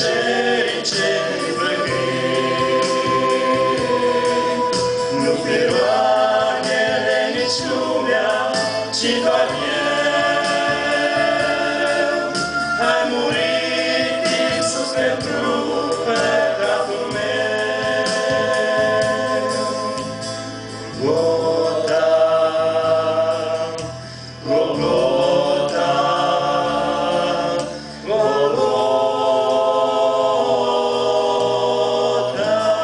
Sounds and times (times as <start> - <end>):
Choir: 0.0 - 32.8
Gospel music: 0.0 - 32.8.